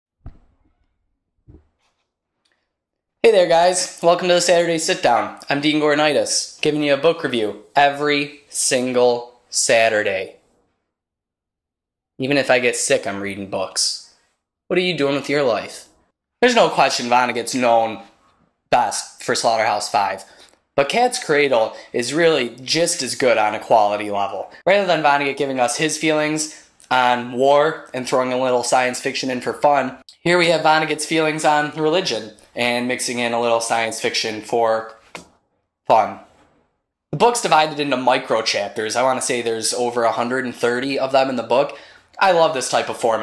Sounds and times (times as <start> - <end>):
Speech: 3.2 - 10.4, 12.2 - 35.0, 35.9 - 36.3, 37.2 - 43.2.